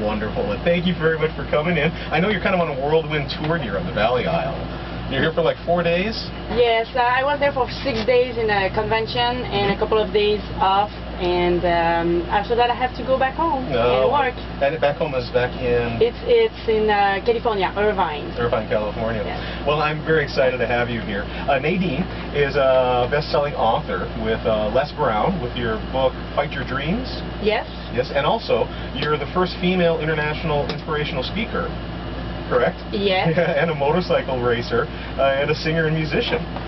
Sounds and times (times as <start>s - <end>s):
Speech: 0.0s - 31.7s, 32.5s - 36.5s.